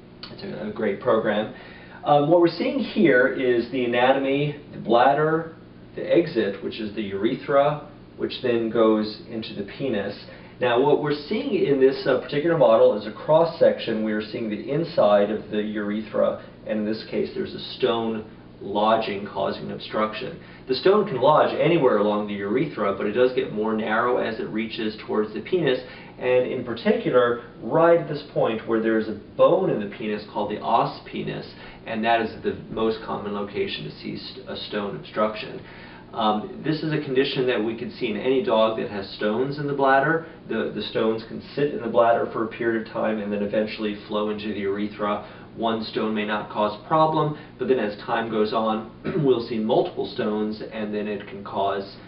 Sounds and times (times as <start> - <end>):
Speech: 0.2 - 52.0.